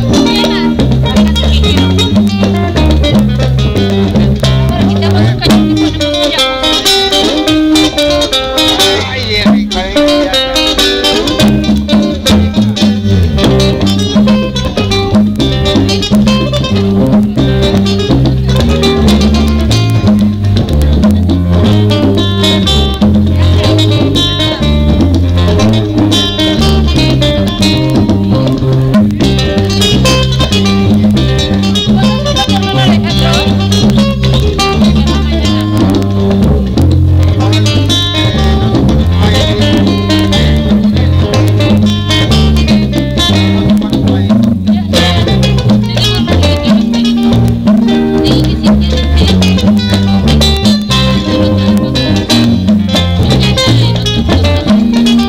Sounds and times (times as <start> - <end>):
Flamenco: 0.0 - 55.2
Guitar: 0.0 - 55.2.